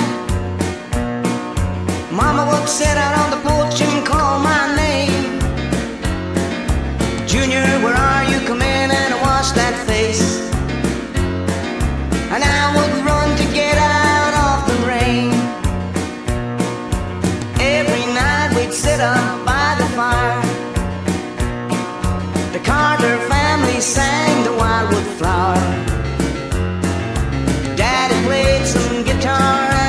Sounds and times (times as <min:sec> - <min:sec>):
Bluegrass: 0:00.0 - 0:29.8.